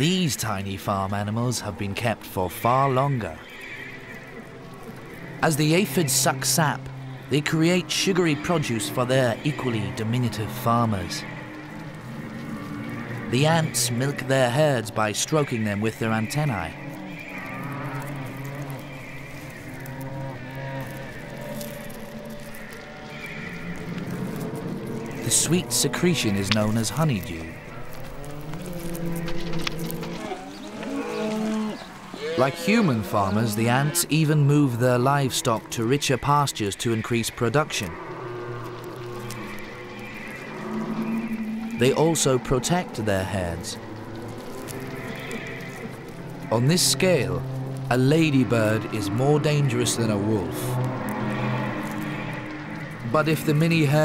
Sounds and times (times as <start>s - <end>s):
Speech: 0.0s - 3.4s, 5.4s - 11.3s, 13.3s - 16.8s, 25.2s - 27.5s, 32.2s - 38.0s, 41.8s - 43.8s, 46.5s - 50.7s, 53.1s - 54.0s.